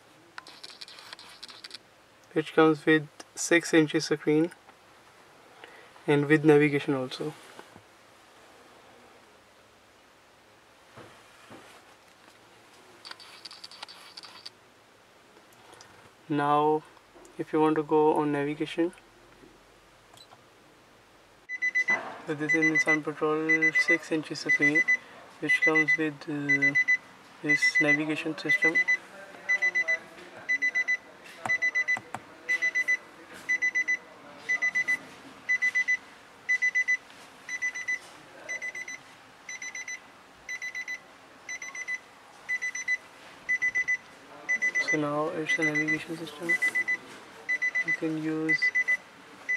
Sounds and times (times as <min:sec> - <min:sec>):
Speech: 0:02.3 - 0:04.6, 0:06.1 - 0:07.4, 0:16.3 - 0:19.0, 0:22.3 - 0:35.0, 0:44.2 - 0:49.5.